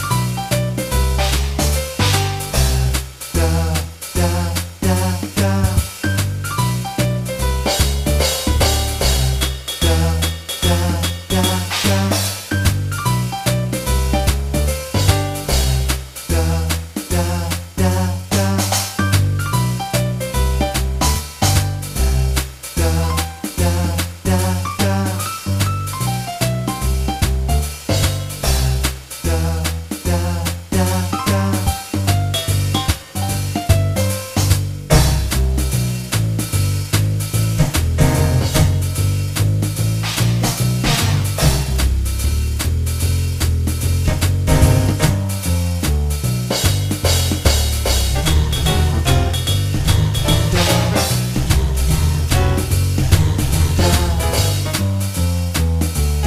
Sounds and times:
Funk: 5.0 - 16.5, 18.3 - 22.5, 24.4 - 29.2, 30.7 - 56.2.

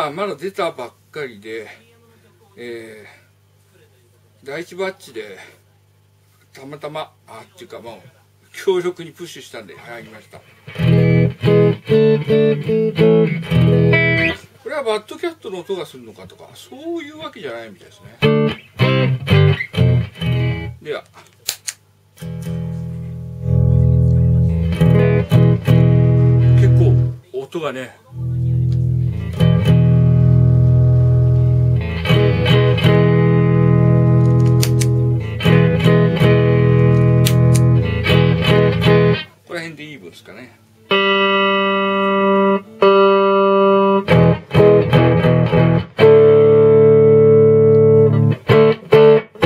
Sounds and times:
Speech: 0.0 - 5.9, 6.5 - 10.5, 14.4 - 18.2, 20.8 - 21.2, 23.0 - 24.6, 26.5 - 28.9, 39.4 - 40.7
Music: 10.6 - 14.4, 18.2 - 20.8, 22.2 - 27.2, 28.2 - 39.3, 40.8 - 49.4.

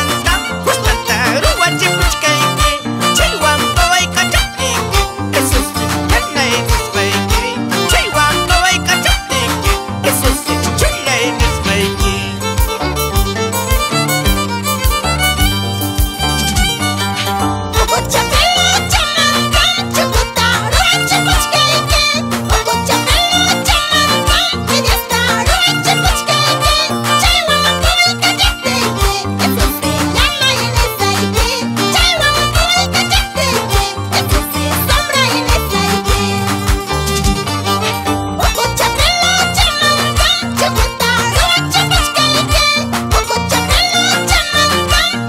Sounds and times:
Violin, fiddle: 0.0 - 45.2.

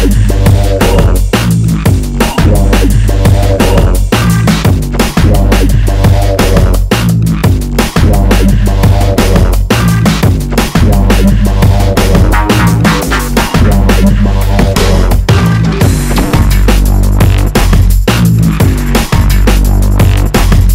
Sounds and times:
Drum and bass: 0.0 - 20.7.

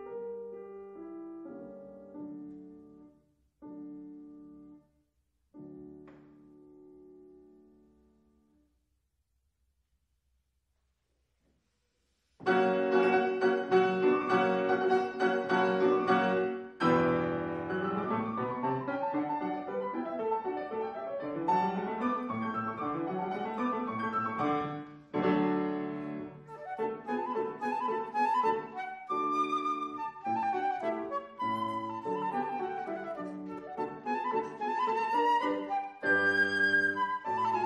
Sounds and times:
Piano: 0.0 - 8.8, 12.4 - 37.6.

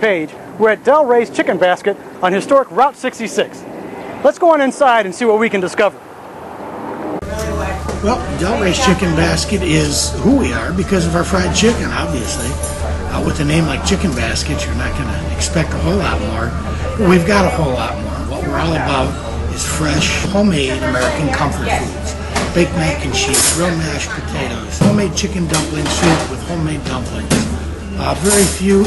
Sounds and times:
Speech: 0.0 - 3.6, 4.2 - 5.9, 7.3 - 28.8.

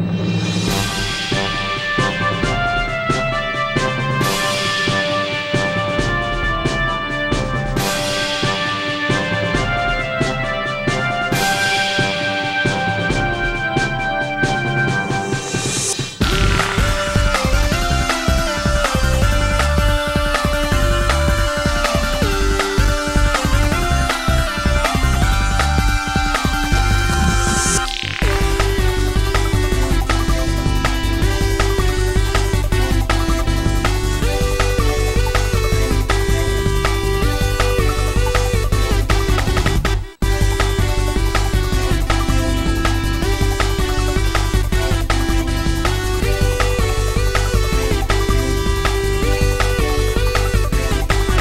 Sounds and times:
Music: 0.0 - 51.4.

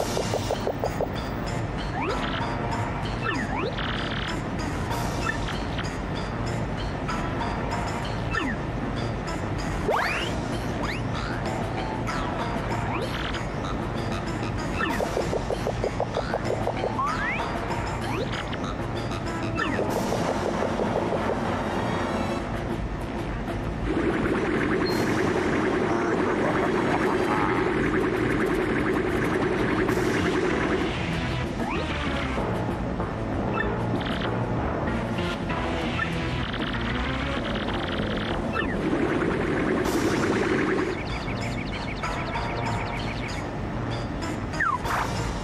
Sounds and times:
Music: 0.0 - 45.4.

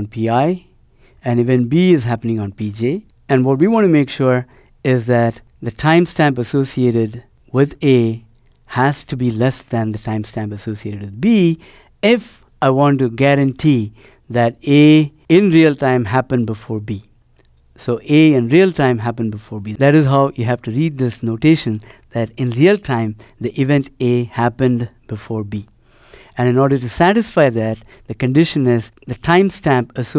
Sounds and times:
Speech: 0.0 - 17.1, 17.8 - 25.7, 26.4 - 30.1.

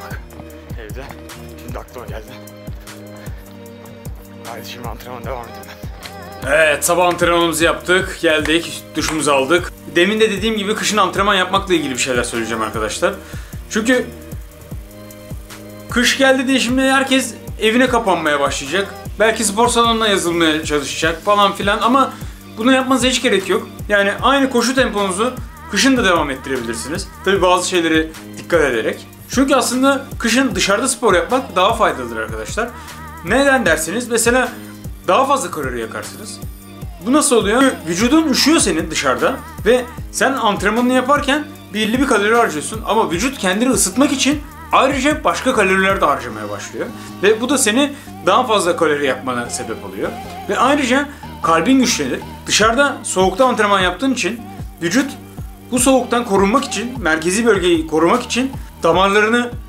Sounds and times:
Music: 0.0 - 59.6
Speech: 0.1 - 2.4, 4.5 - 5.8, 6.4 - 14.2, 15.9 - 36.4, 37.0 - 59.6.

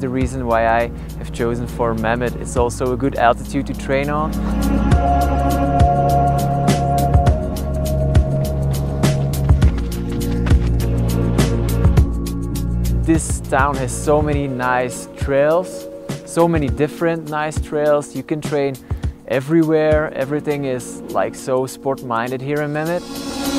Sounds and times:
Speech: 0.0 - 4.3, 13.1 - 23.0
Music: 0.0 - 23.5.

